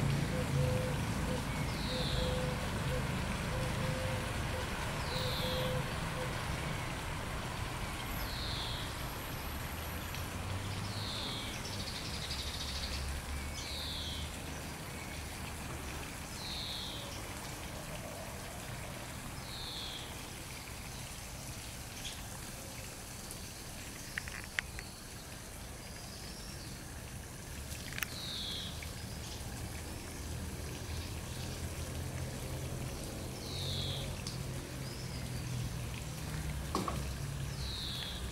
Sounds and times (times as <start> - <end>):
Outside, rural or natural: 0.0 - 38.3.